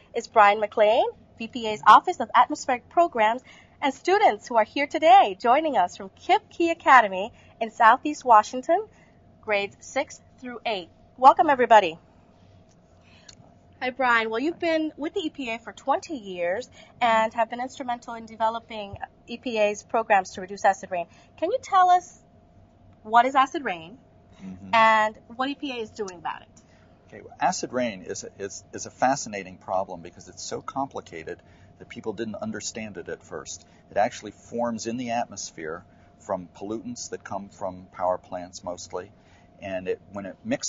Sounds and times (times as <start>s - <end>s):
Speech: 0.2s - 8.9s, 9.5s - 12.0s, 13.8s - 22.1s, 23.1s - 26.4s, 27.2s - 40.6s.